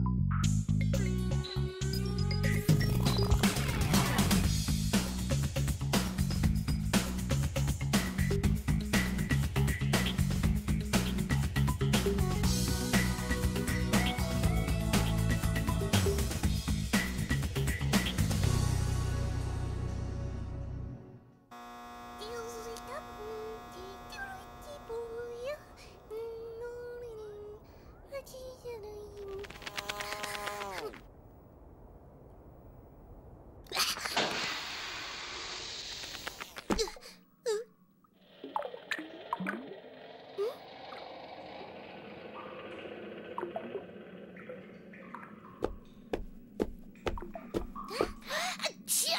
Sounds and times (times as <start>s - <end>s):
Fly, housefly: 21.5s - 26.5s
Mosquito: 21.5s - 26.5s.